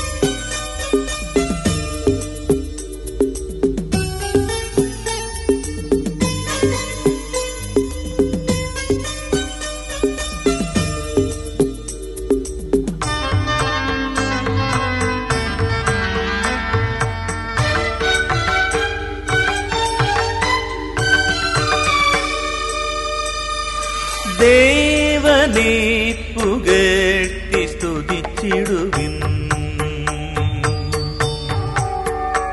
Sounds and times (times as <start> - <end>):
Musical instrument: 0.0 - 32.5.